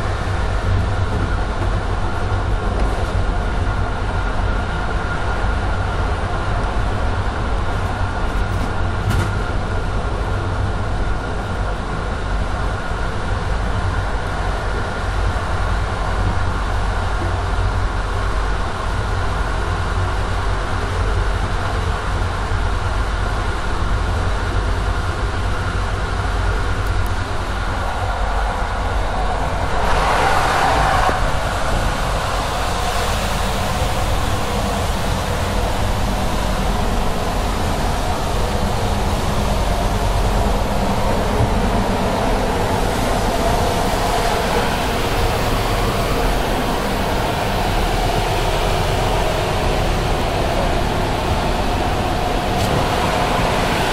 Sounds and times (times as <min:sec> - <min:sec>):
Vehicle: 0:00.0 - 0:53.9.